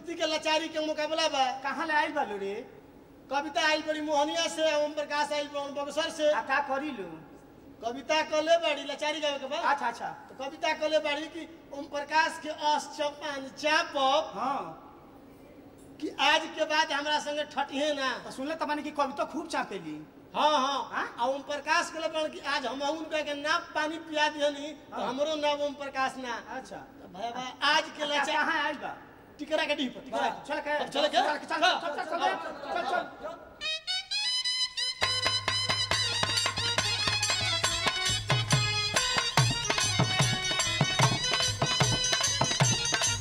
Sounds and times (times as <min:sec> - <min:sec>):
Speech: 0:00.0 - 0:02.7, 0:03.3 - 0:14.9, 0:16.0 - 0:33.5
Music: 0:33.6 - 0:43.2.